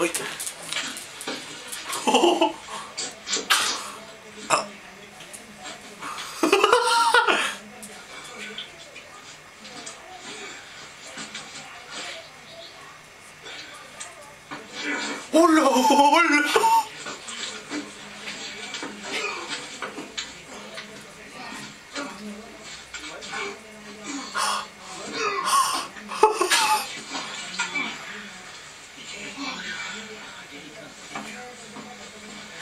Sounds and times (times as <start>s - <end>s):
Speech: 0.0s - 0.8s, 2.2s - 32.6s.